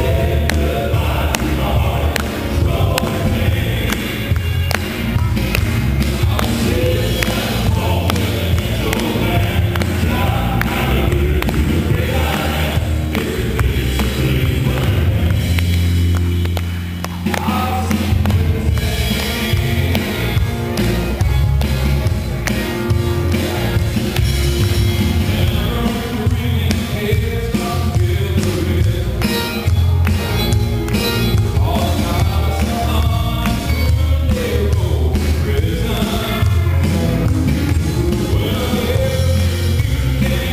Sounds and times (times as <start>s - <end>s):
Choir: 0.0s - 4.7s, 5.4s - 15.5s, 17.3s - 20.8s, 23.2s - 29.2s, 31.6s - 40.5s.